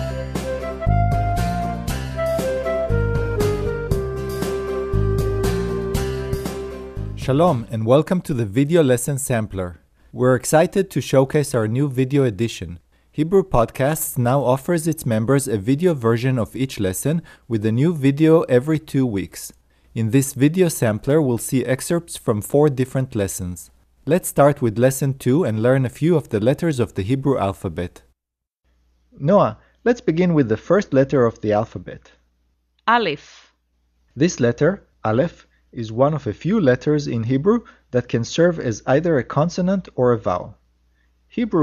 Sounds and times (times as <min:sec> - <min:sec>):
Speech: 0:07.2 - 0:28.1, 0:29.2 - 0:32.2, 0:32.9 - 0:33.5, 0:34.2 - 0:40.6, 0:41.3 - 0:41.6.